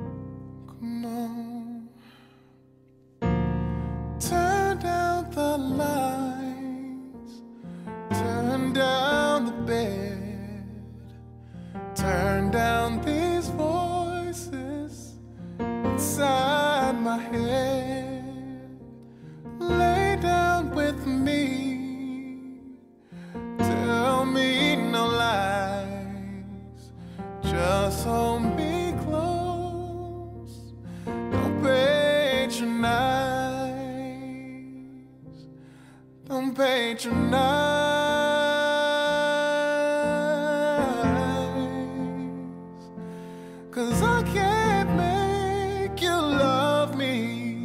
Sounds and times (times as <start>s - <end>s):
Music: 0.0s - 47.6s.